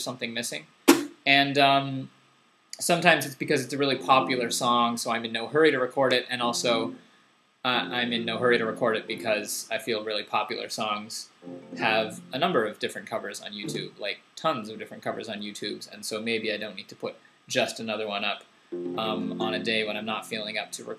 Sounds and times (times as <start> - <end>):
Speech: 0.0 - 2.1, 2.8 - 7.0, 7.7 - 18.4, 19.0 - 20.9
Music: 3.7 - 4.9, 6.3 - 7.0, 7.7 - 9.6, 11.4 - 12.7, 13.6 - 14.0, 18.7 - 20.9.